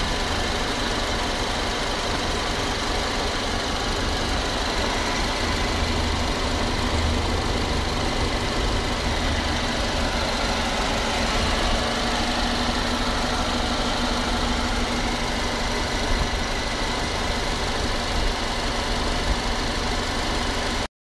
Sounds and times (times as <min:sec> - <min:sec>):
Idling: 0:00.0 - 0:20.9
Medium engine (mid frequency): 0:00.0 - 0:20.9.